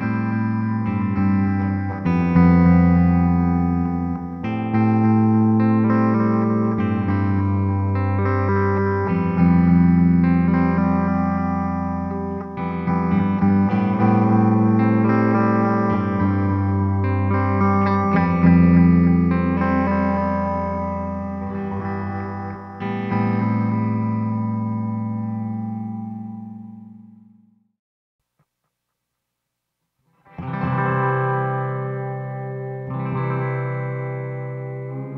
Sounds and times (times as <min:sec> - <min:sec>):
Music: 0:00.0 - 0:27.8, 0:30.1 - 0:35.1.